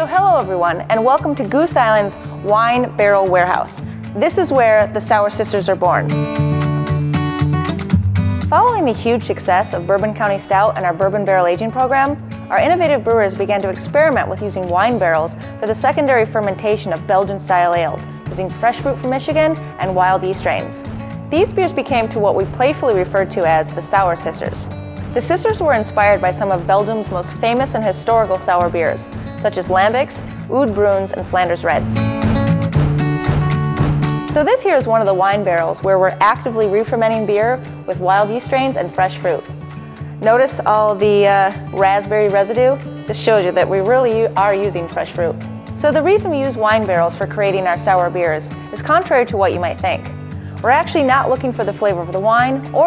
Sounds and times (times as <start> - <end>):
Speech: 0.0 - 6.1, 8.6 - 20.8, 21.4 - 32.0, 34.4 - 39.5, 40.2 - 50.0, 50.6 - 52.8
Music: 0.0 - 52.8.